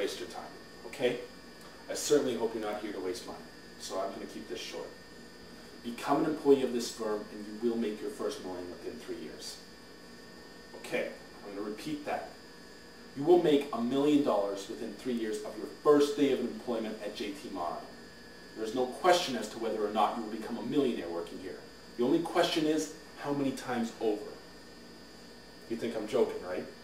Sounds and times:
Narration, monologue: 0.0 - 26.8.

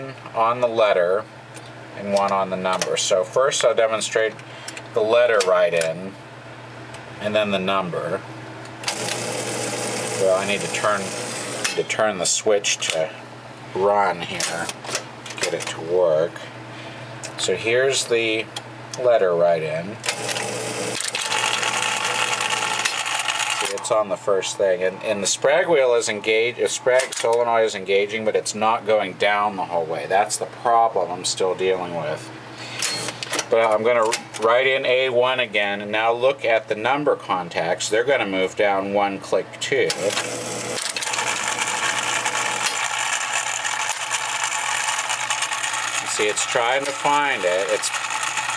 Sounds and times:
Speech: 0.0 - 1.3, 2.0 - 4.4, 5.0 - 6.2, 7.2 - 8.2, 10.2 - 11.2, 11.8 - 13.2, 13.8 - 14.7, 15.4 - 16.6, 17.3 - 20.0, 23.6 - 32.3, 33.5 - 40.1, 46.0 - 48.0.

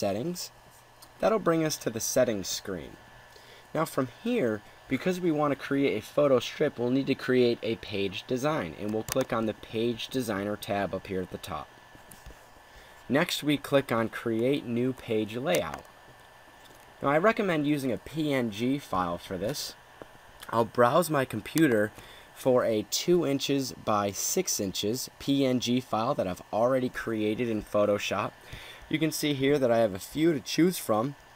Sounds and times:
Speech: 0.0 - 0.6, 1.2 - 3.0, 3.7 - 11.7, 13.1 - 15.9, 17.0 - 19.8, 20.4 - 31.2.

